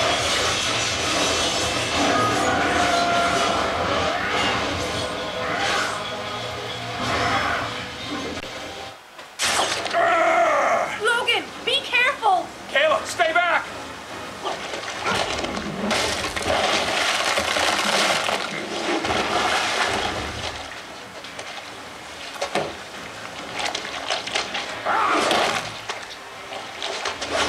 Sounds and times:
Water: 9.4s - 27.4s.

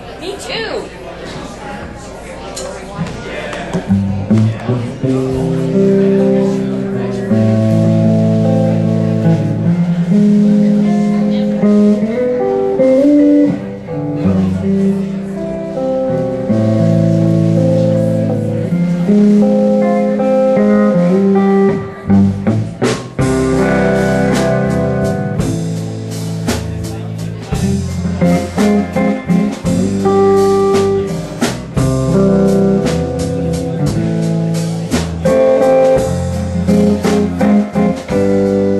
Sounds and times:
Acoustic guitar: 3.7s - 38.7s
Strum: 3.7s - 38.7s.

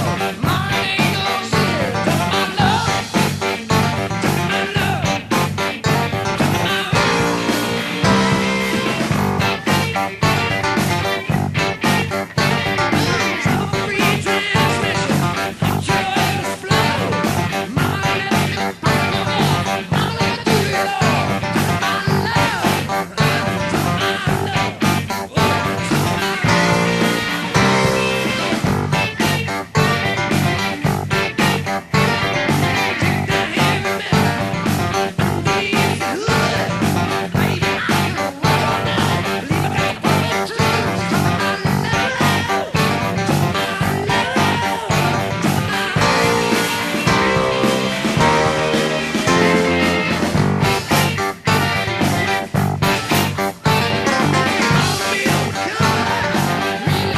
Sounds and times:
Music: 0.0s - 57.1s.

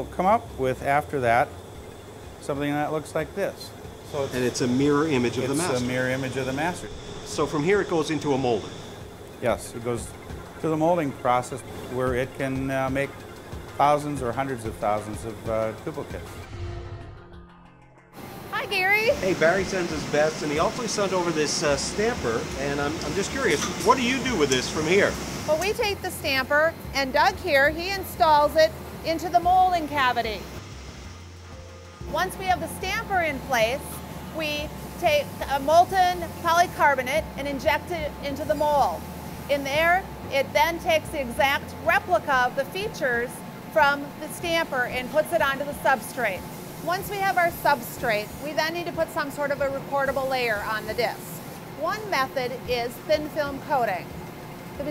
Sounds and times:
Music: 0.0s - 54.9s.

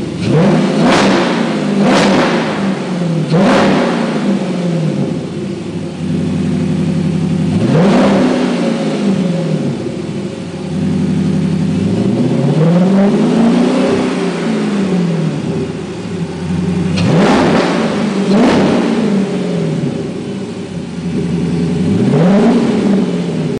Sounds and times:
Medium engine (mid frequency): 0.0s - 23.5s
Vehicle: 0.0s - 23.5s
Accelerating, revving, vroom: 0.2s - 4.8s, 7.5s - 9.6s, 11.9s - 15.2s, 16.9s - 19.7s, 21.9s - 23.4s.

